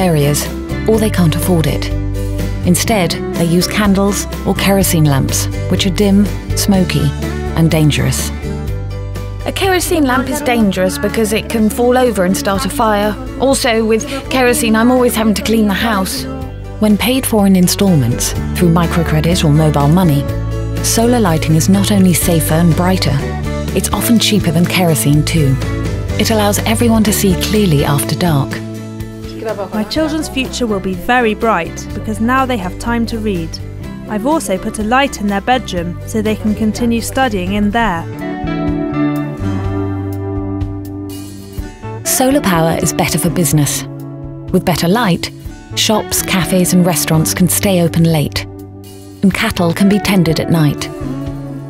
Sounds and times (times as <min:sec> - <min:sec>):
Speech: 0:00.0 - 0:01.9, 0:02.6 - 0:08.3, 0:09.5 - 0:16.2, 0:16.8 - 0:25.6, 0:26.2 - 0:28.6, 0:29.3 - 0:38.1, 0:42.1 - 0:43.9, 0:44.5 - 0:48.4, 0:49.2 - 0:50.9.